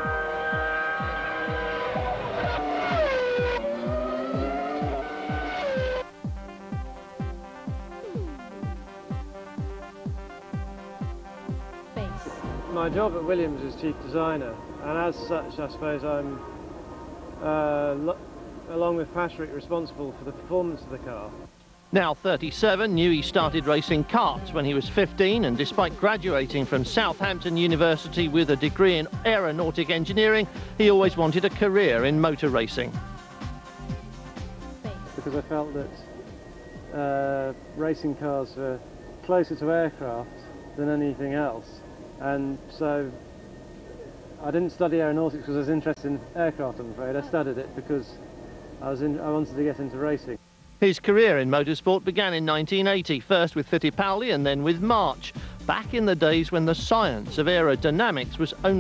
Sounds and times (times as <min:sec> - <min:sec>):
Music: 0:00.0 - 0:58.8
Speech: 0:12.0 - 0:16.4, 0:17.4 - 0:21.3, 0:22.0 - 0:33.0, 0:34.9 - 0:36.0, 0:37.0 - 0:43.2, 0:44.4 - 0:48.2, 0:48.8 - 0:58.8.